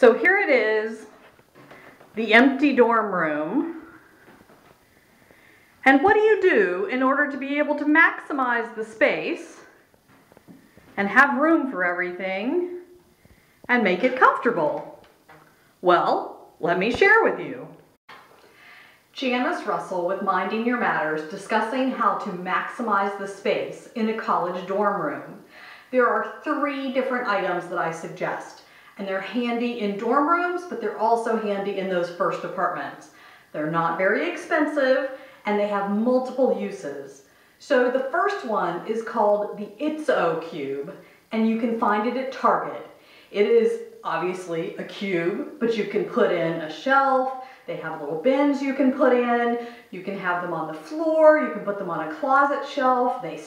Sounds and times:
Speech: 0.0s - 1.2s, 2.2s - 4.0s, 5.8s - 9.8s, 11.0s - 12.9s, 13.7s - 15.0s, 15.8s - 17.8s, 19.2s - 53.4s.

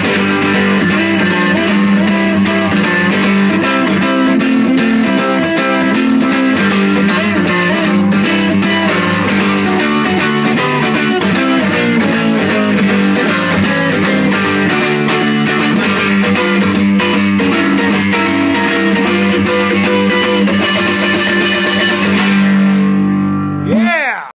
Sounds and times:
Acoustic guitar: 0.0s - 23.8s
Strum: 0.0s - 23.8s
Electric guitar: 0.0s - 23.9s.

